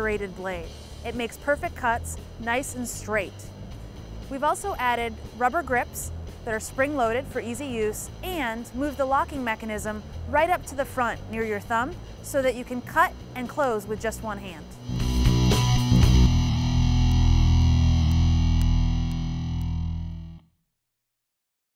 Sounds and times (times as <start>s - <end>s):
Speech: 0.0s - 3.5s, 4.3s - 14.8s
Music: 0.0s - 20.6s.